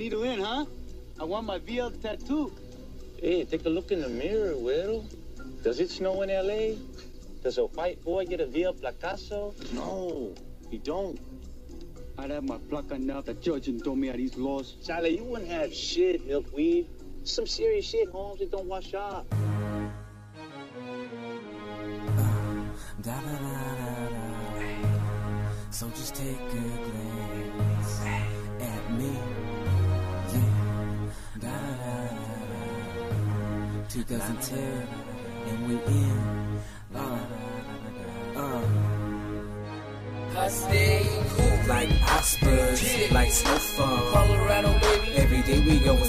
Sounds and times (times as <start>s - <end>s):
Middle Eastern music: 21.2s - 46.0s.